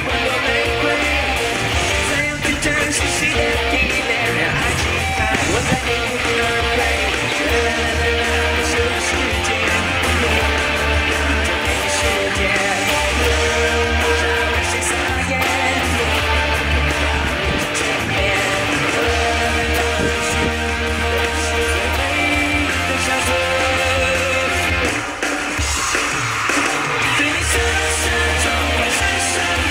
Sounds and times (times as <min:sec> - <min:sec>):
Guitar: 0:00.0 - 0:29.7.